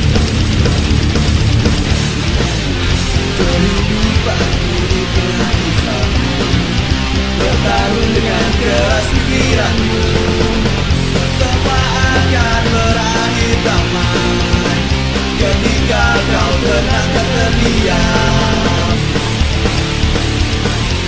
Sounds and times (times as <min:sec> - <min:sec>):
Jazz: 0:00.0 - 0:21.0.